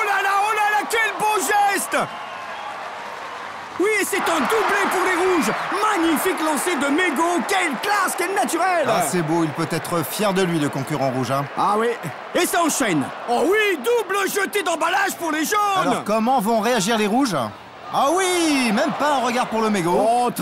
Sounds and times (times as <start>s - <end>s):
Speech: 3.8s - 20.4s.